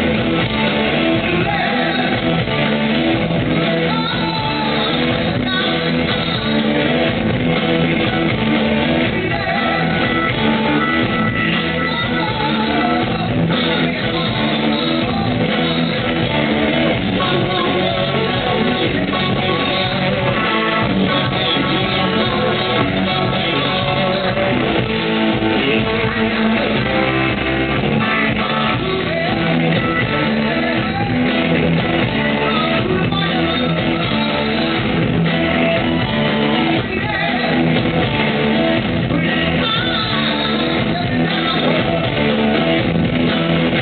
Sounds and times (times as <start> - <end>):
Singing: 0.0 - 7.1, 8.1 - 43.8
Rock music: 0.0 - 43.8.